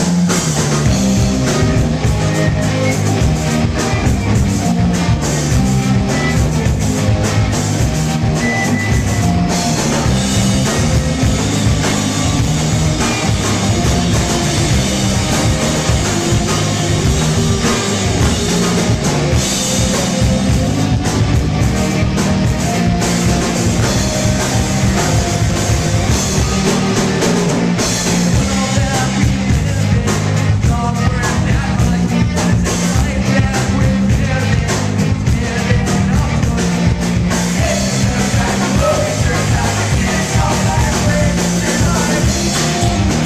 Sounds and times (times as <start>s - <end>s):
Heavy metal: 0.0s - 43.2s
Progressive rock: 0.0s - 43.2s
Punk rock: 0.0s - 43.2s
Rock and roll: 0.0s - 43.2s.